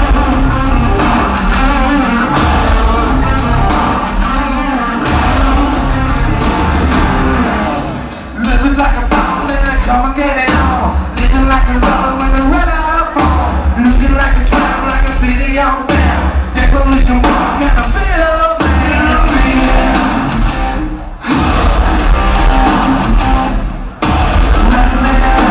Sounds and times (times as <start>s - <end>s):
Music: 0.0s - 25.5s.